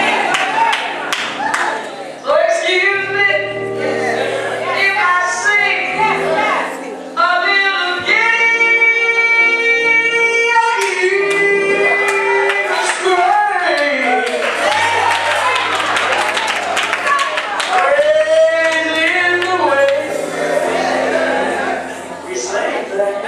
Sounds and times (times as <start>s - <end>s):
Music: 0.0s - 23.2s.